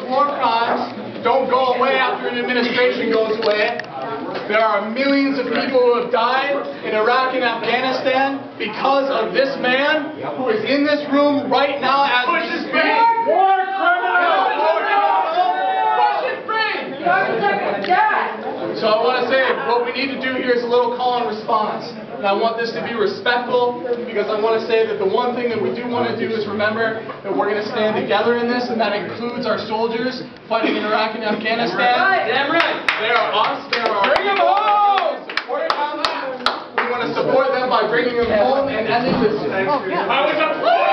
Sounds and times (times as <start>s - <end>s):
Narration, monologue: 0.0s - 13.0s, 17.6s - 34.4s
Male speech, man speaking: 0.0s - 40.9s.